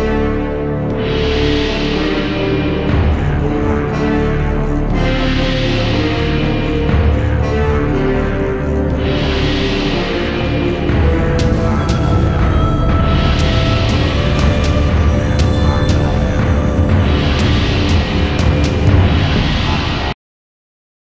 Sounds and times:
Soundtrack music: 0.0 - 20.2.

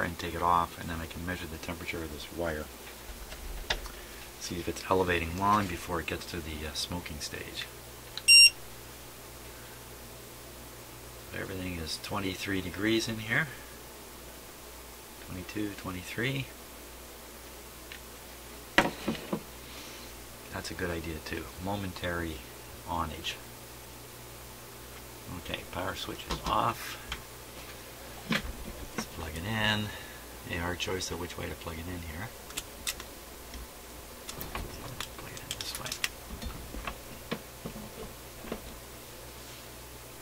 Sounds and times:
Beep, bleep: 8.3 - 8.6.

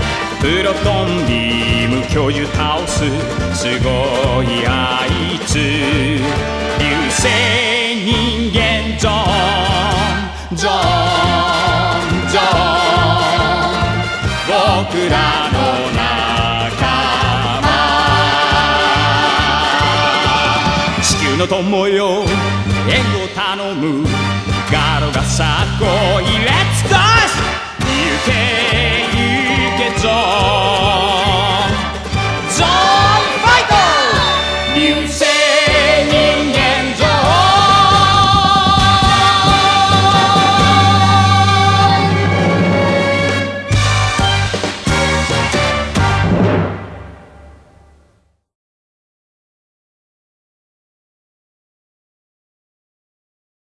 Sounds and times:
Timpani: 0.0 - 48.3.

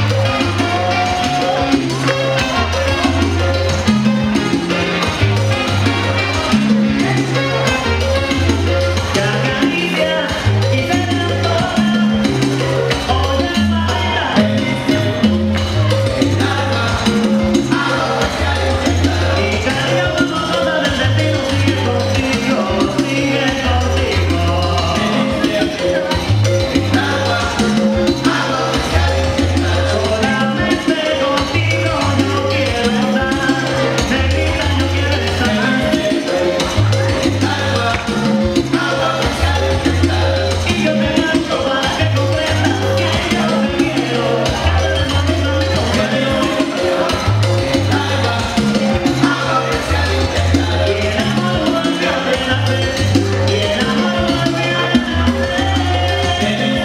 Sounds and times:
Salsa music: 0.0 - 56.8.

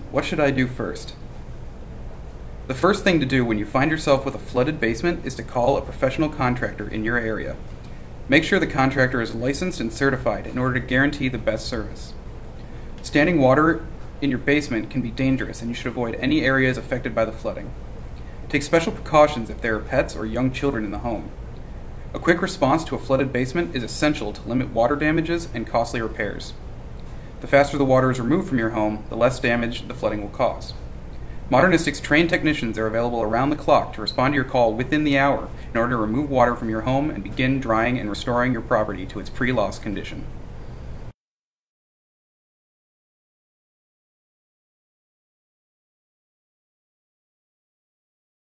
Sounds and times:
Speech: 0.0 - 1.2, 2.7 - 7.6, 8.3 - 12.2, 13.0 - 17.8, 18.5 - 21.4, 22.1 - 26.6, 27.4 - 30.8, 31.5 - 40.4.

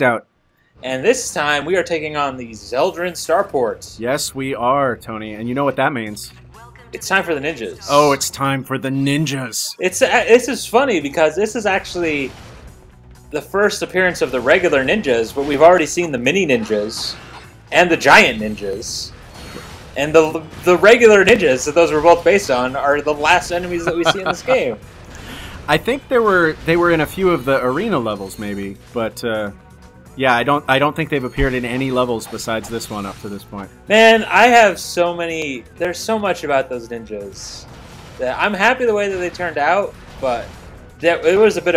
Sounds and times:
Speech: 0.8 - 12.3, 13.4 - 19.1, 20.0 - 24.8, 25.7 - 29.5, 30.2 - 37.6, 38.2 - 41.7.

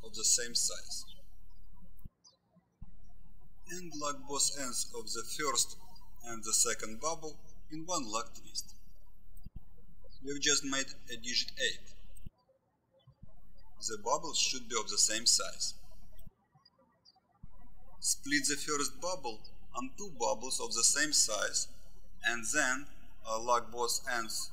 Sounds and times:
Speech: 0.0 - 1.1, 3.7 - 8.7, 10.2 - 12.0, 13.8 - 15.8, 18.0 - 24.5.

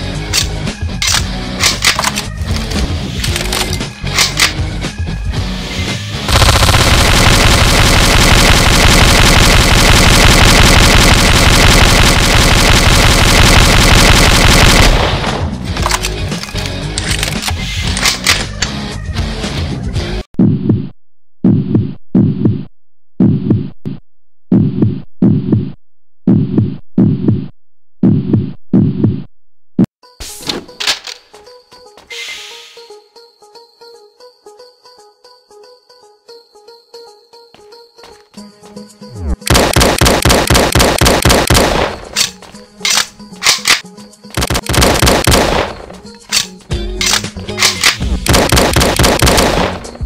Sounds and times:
Music: 0.0 - 7.0, 14.4 - 20.3, 30.0 - 39.5, 41.8 - 50.0
Heart murmur: 20.4 - 29.3.

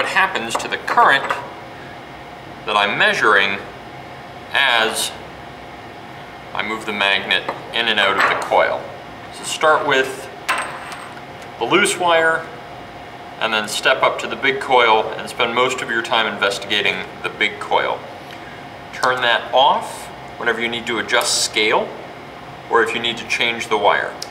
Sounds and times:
Speech: 0.0 - 1.5, 2.7 - 3.7, 4.5 - 5.2, 6.5 - 10.4, 11.6 - 12.6, 13.4 - 18.1, 18.9 - 22.0, 22.7 - 24.3.

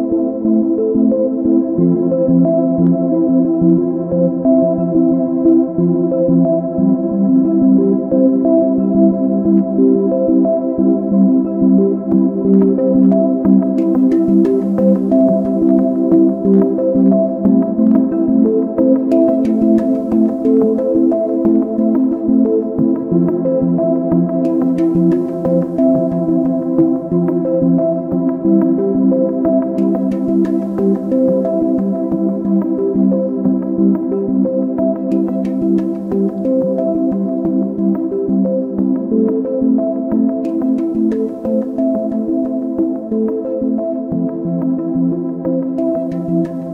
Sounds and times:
Music: 0.0 - 46.7.

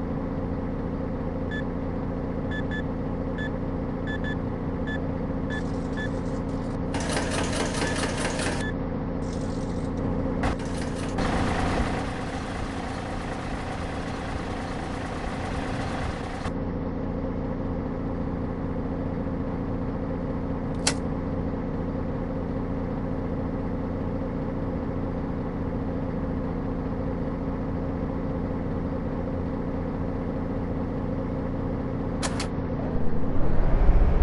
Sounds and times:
Bus: 0.0 - 34.2.

